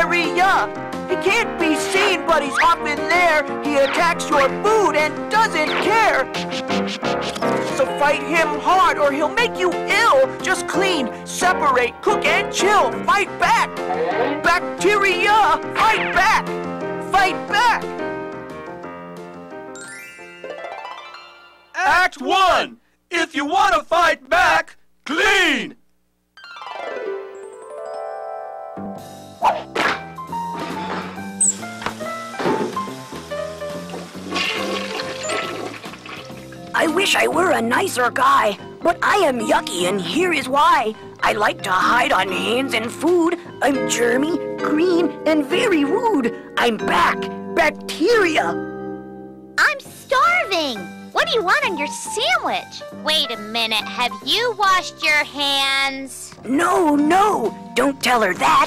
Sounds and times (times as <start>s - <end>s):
Speech: 0.0s - 6.3s, 21.8s - 25.8s, 36.8s - 48.6s, 49.6s - 58.6s
Music: 0.0s - 21.8s, 26.4s - 58.6s.